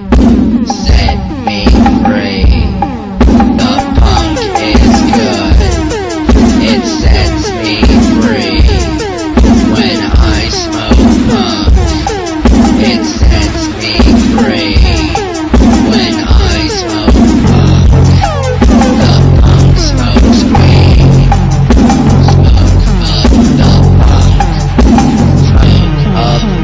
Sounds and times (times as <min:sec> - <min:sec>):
Punk rock: 0:00.0 - 0:26.6.